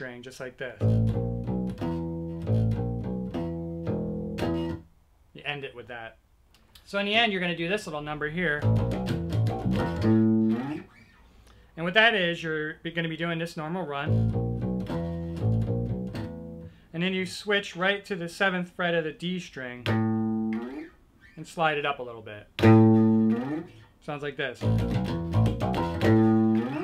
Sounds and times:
Speech: 0:00.0 - 0:00.8, 0:05.4 - 0:06.2, 0:06.8 - 0:08.7, 0:11.8 - 0:14.1, 0:16.9 - 0:19.9, 0:21.4 - 0:22.5, 0:24.0 - 0:24.7
Guitar: 0:00.0 - 0:04.9, 0:07.7 - 0:11.7, 0:12.4 - 0:16.8, 0:19.7 - 0:26.8
Inside, small room: 0:00.0 - 0:26.8.

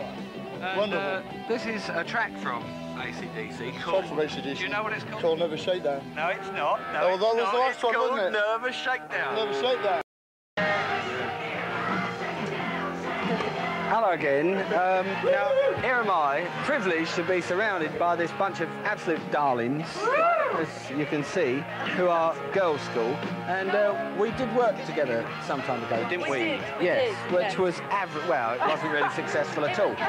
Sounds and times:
Pop music: 0:00.0 - 0:05.5, 0:10.6 - 0:30.0
Rhythm and blues: 0:10.6 - 0:30.0.

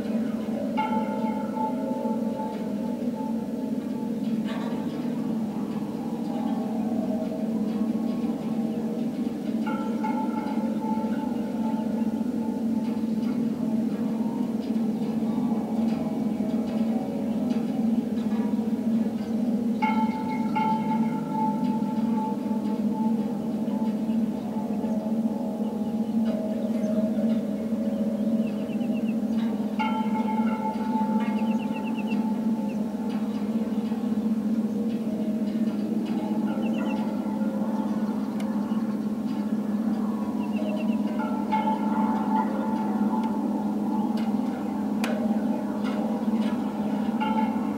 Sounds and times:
Music: 0:00.0 - 0:47.7.

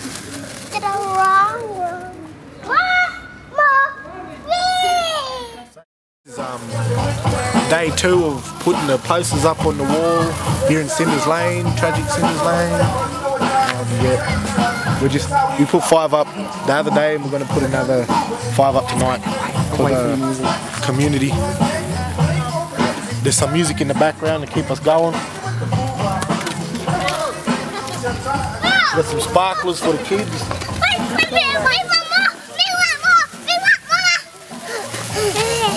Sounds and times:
Children playing: 0:00.0 - 0:35.7
Music: 0:06.3 - 0:35.7.

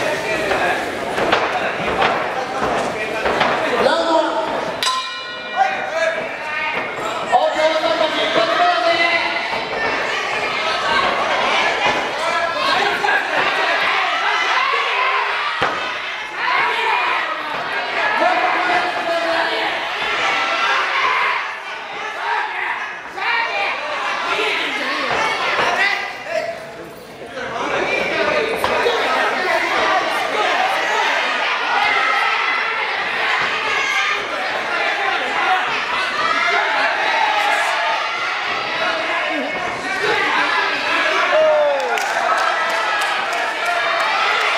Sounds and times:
Speech: 0:00.0 - 0:04.6, 0:05.6 - 0:15.5, 0:16.4 - 0:37.9.

